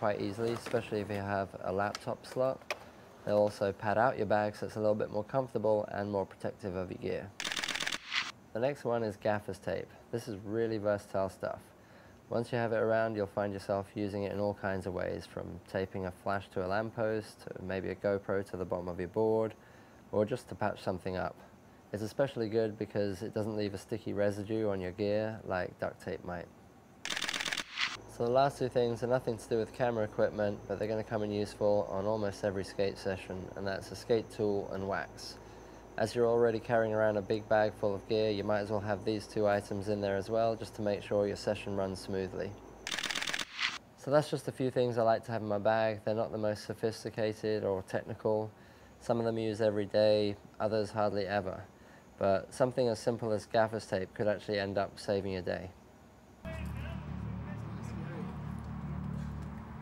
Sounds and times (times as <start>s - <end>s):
Speech: 0.0s - 2.6s, 3.2s - 7.4s, 8.5s - 11.7s, 12.3s - 26.5s, 28.1s - 35.4s, 36.0s - 42.6s, 44.0s - 55.8s, 56.5s - 58.5s.